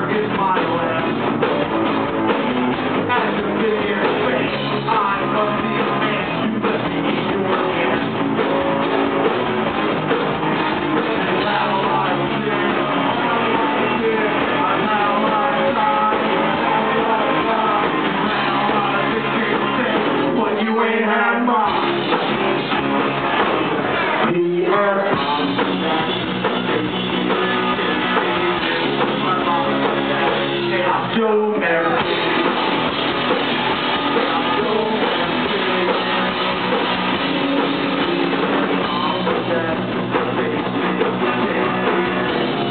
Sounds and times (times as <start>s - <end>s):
Male singing: 0.0s - 1.7s, 3.0s - 8.8s, 10.8s - 22.1s, 24.0s - 26.5s, 28.8s - 32.6s, 33.9s - 36.6s, 37.4s - 42.7s
Music: 0.0s - 42.7s.